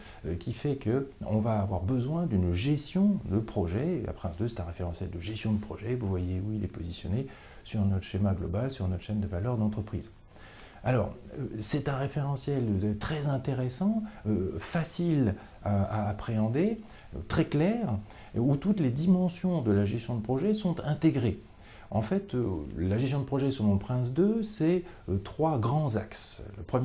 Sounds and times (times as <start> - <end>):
Speech: 0.0 - 10.2, 10.8 - 26.8.